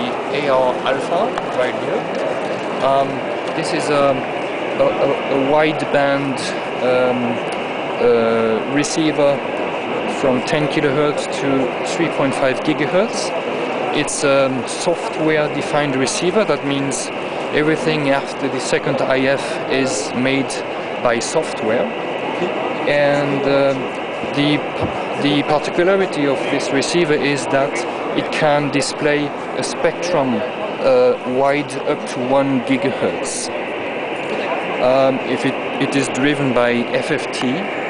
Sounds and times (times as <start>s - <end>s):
Speech: 0.0s - 2.1s, 2.8s - 7.4s, 8.0s - 9.4s, 10.1s - 13.3s, 13.9s - 33.5s, 34.3s - 37.7s.